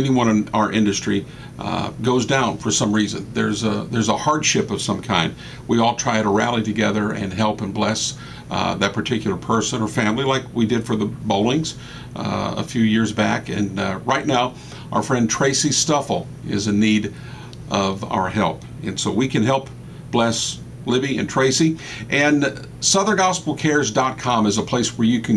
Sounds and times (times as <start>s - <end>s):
Speech: 0.0s - 25.3s.